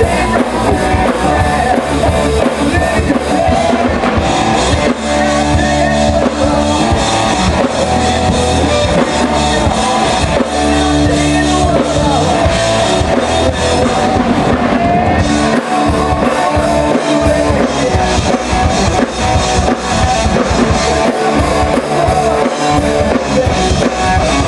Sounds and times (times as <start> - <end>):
Rock and roll: 0.0 - 24.4.